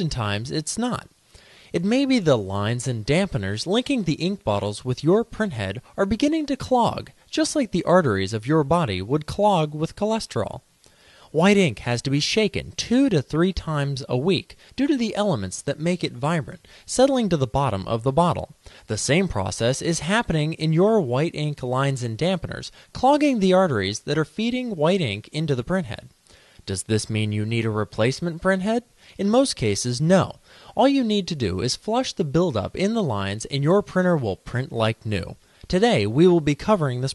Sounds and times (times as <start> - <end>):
Speech: 0.0 - 10.7, 11.3 - 37.1.